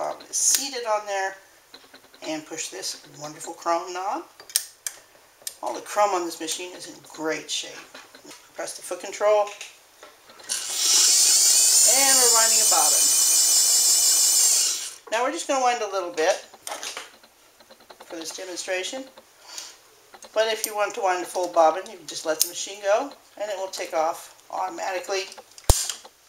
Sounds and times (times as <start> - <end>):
Speech: 0.0 - 1.4, 2.2 - 4.3, 5.6 - 7.9, 8.6 - 9.6, 11.8 - 13.0, 15.1 - 16.5, 18.1 - 19.1, 20.3 - 25.4
Dental drill, dentist's drill: 10.3 - 15.1.